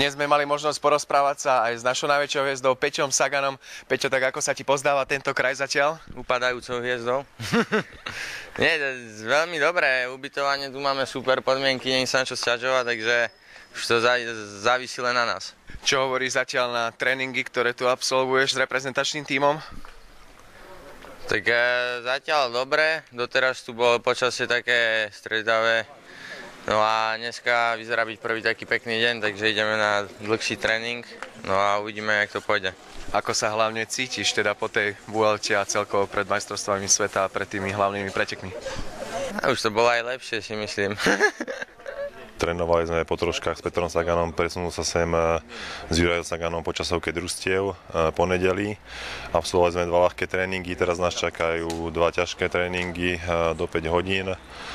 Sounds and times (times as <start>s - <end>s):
Speech: 0.0s - 7.3s, 8.6s - 19.8s, 20.6s - 54.4s.